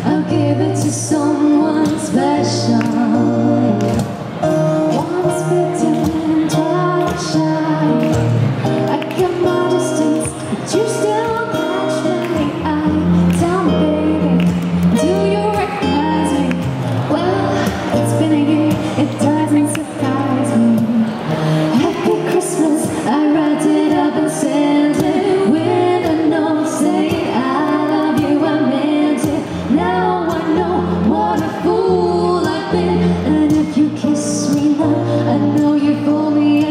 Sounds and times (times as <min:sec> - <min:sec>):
Female singing: 0:00.0 - 0:04.0, 0:04.8 - 0:08.2, 0:08.9 - 0:36.7
Music: 0:00.0 - 0:36.7
Speech: 0:18.1 - 0:21.0.